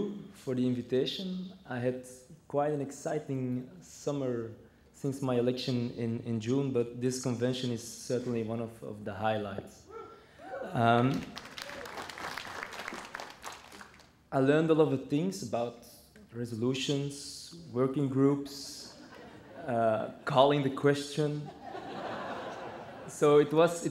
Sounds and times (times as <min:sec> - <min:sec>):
Male speech, man speaking: 0:00.0 - 0:09.8, 0:10.7 - 0:11.3, 0:14.4 - 0:19.0, 0:19.6 - 0:21.5, 0:23.1 - 0:23.9.